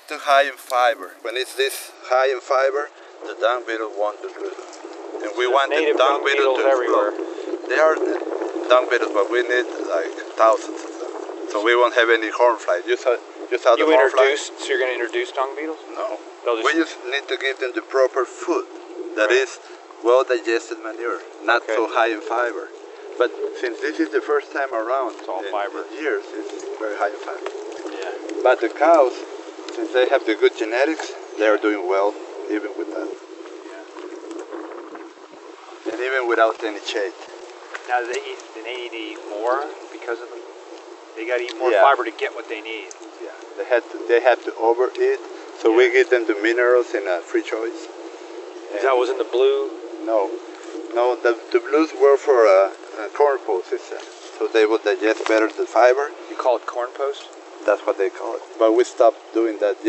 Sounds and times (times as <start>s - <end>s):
Speech: 0.0s - 4.6s, 5.2s - 33.1s, 35.9s - 37.2s, 37.9s - 40.4s, 41.2s - 47.9s, 48.7s - 59.8s.